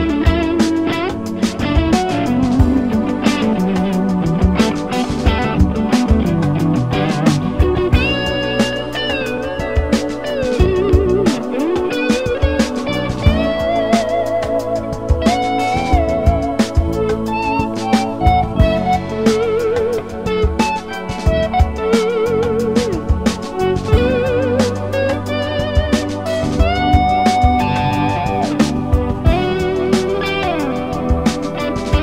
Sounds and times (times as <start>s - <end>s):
Electric guitar: 0.0s - 32.0s.